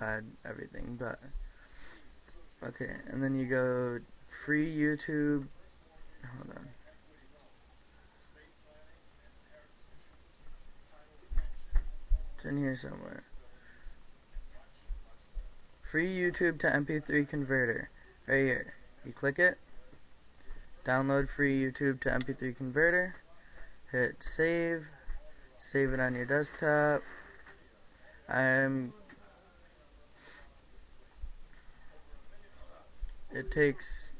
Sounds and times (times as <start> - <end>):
Speech: 0.0 - 1.4, 2.2 - 30.9, 31.8 - 34.1.